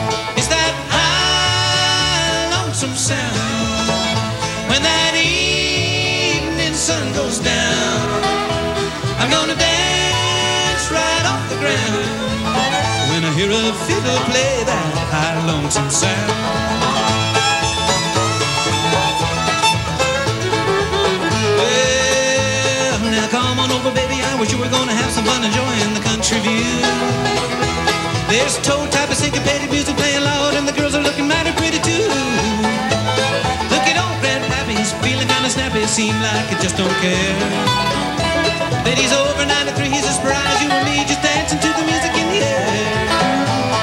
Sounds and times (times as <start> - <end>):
Music: 0.0 - 43.8.